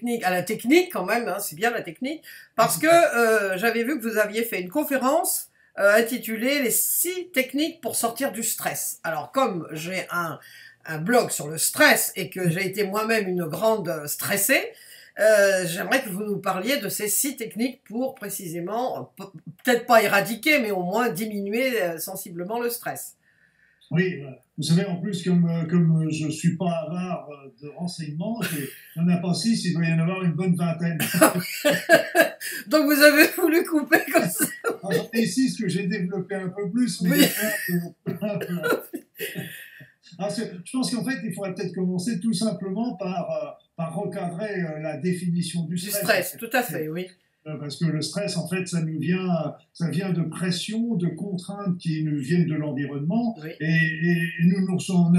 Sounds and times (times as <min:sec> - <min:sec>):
Speech: 0:00.0 - 0:23.1, 0:23.9 - 0:55.1.